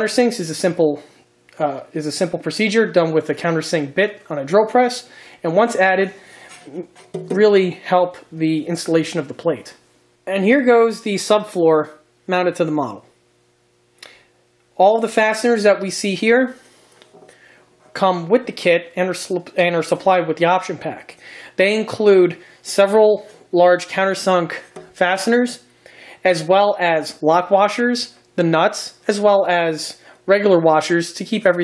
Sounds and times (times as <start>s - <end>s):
Speech: 0.0s - 13.1s, 14.8s - 16.6s, 17.9s - 31.6s
Inside, small room: 0.0s - 31.6s.